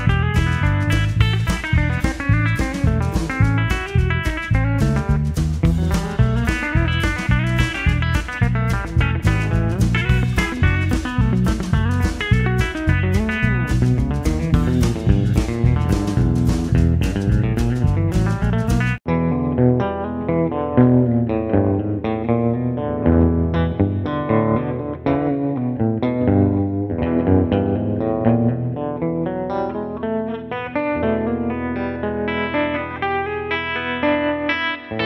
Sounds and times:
Guitar: 0:00.0 - 0:35.0.

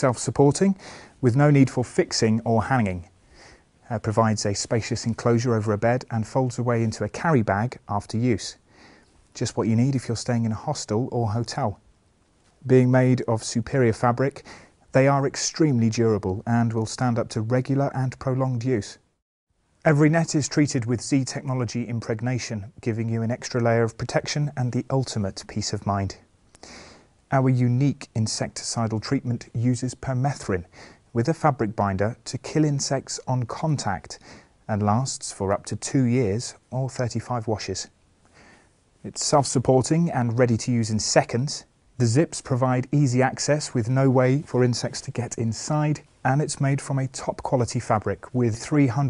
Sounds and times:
Speech: 0:00.0 - 0:03.2, 0:03.8 - 0:08.6, 0:09.4 - 0:11.8, 0:12.6 - 0:19.1, 0:19.8 - 0:26.3, 0:27.3 - 0:38.0, 0:39.0 - 0:49.0.

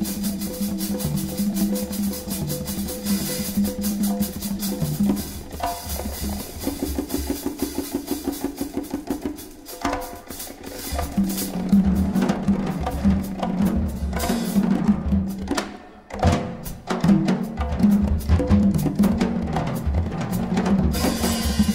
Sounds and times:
Drum: 0:00.0 - 0:21.7
Inside, public space: 0:00.0 - 0:21.7.

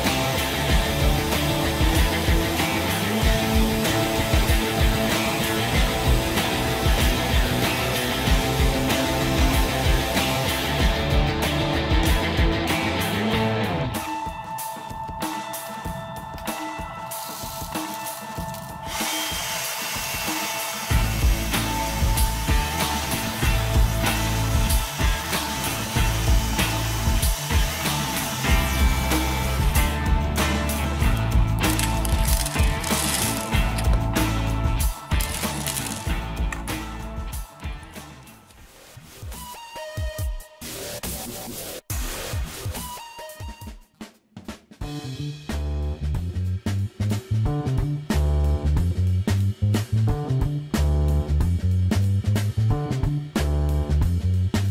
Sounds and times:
Music: 0:00.0 - 0:54.7.

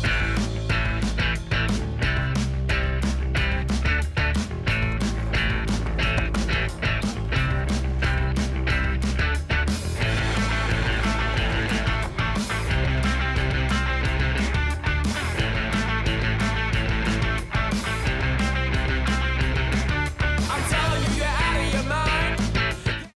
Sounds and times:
Pop music: 0:00.0 - 0:23.1.

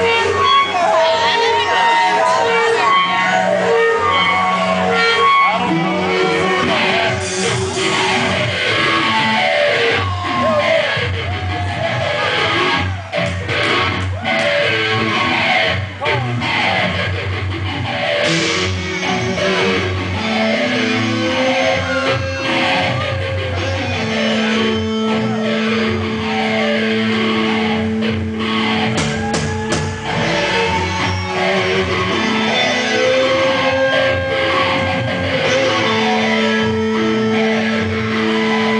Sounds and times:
Music: 0:00.0 - 0:38.8.

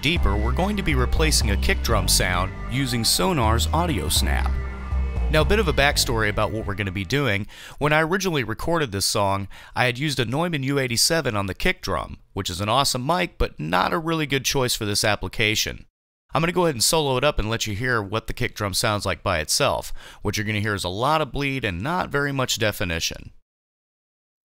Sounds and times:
Speech: 0:00.0 - 0:04.6, 0:05.3 - 0:23.4.

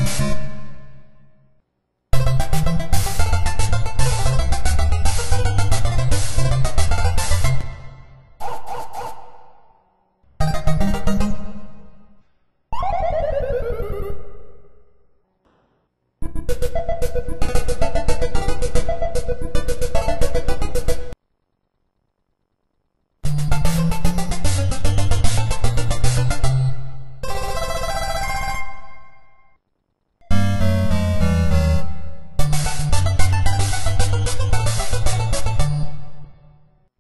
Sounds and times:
Music: 0:00.0 - 0:01.5, 0:02.2 - 0:08.4, 0:10.4 - 0:12.3, 0:16.2 - 0:21.2, 0:23.3 - 0:29.6, 0:30.3 - 0:36.9.

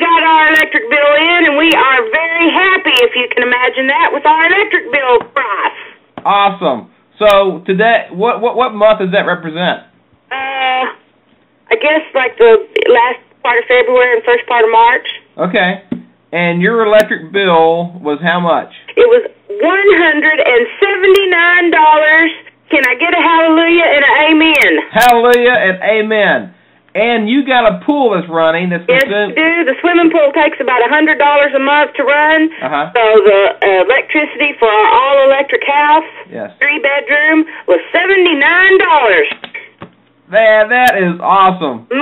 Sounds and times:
Speech: 0:11.7 - 0:39.6.

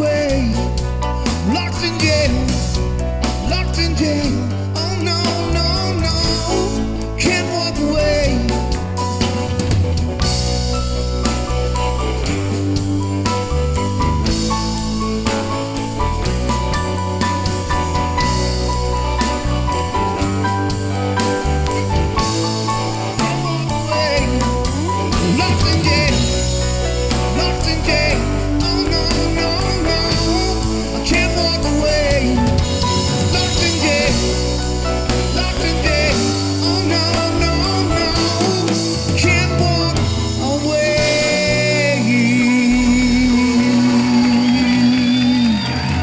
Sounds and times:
Guitar: 0:00.0 - 0:46.0.

